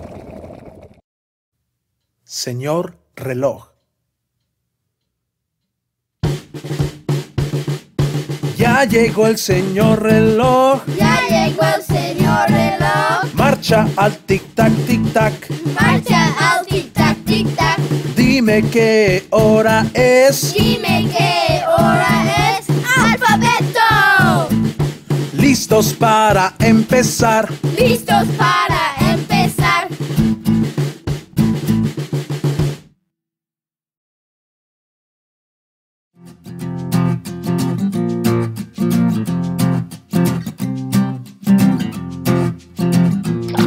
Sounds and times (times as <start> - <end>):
Music: 6.2 - 33.0, 36.2 - 43.6.